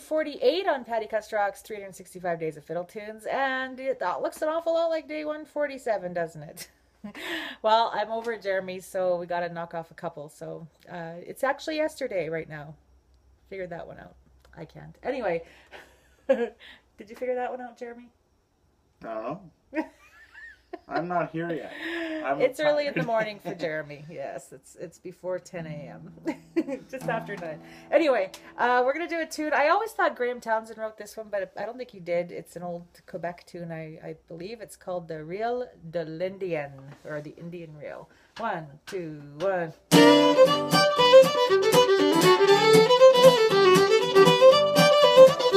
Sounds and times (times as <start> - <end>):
Speech: 20.9 - 26.0, 27.0 - 39.8.